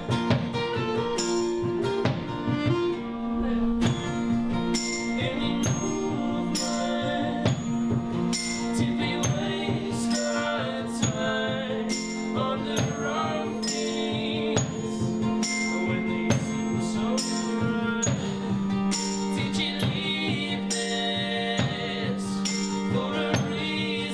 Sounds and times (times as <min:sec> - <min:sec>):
Music: 0:00.0 - 0:24.1.